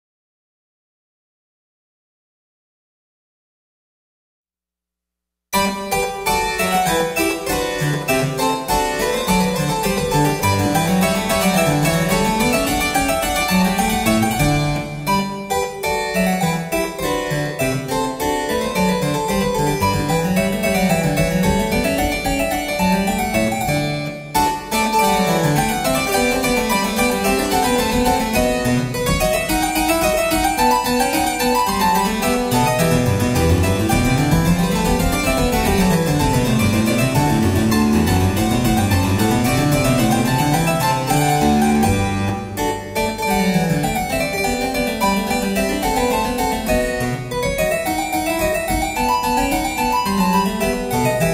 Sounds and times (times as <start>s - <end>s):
Piano: 5.6s - 51.3s.